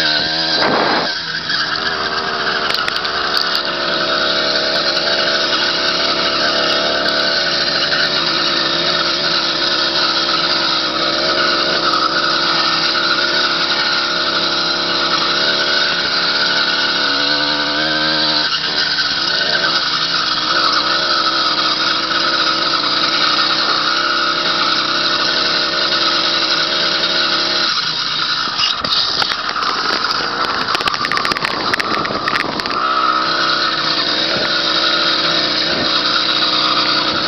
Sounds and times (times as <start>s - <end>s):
Accelerating, revving, vroom: 0.0s - 37.2s
Vehicle: 0.0s - 37.2s.